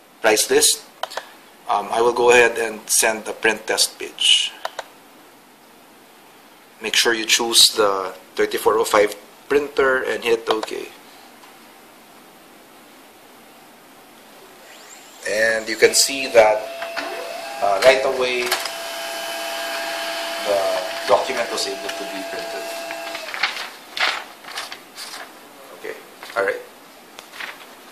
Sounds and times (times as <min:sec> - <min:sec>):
Speech: 0:00.2 - 0:00.9, 0:01.7 - 0:04.6, 0:06.8 - 0:11.0, 0:15.2 - 0:16.7, 0:17.6 - 0:18.6, 0:20.4 - 0:22.9, 0:25.6 - 0:26.7
Printer: 0:14.6 - 0:23.6.